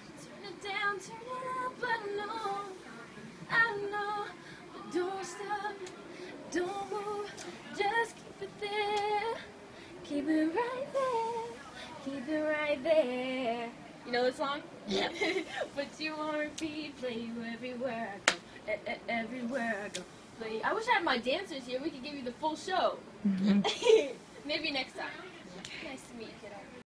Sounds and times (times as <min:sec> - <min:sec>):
Female singing: 0:00.2 - 0:14.4, 0:15.6 - 0:20.9.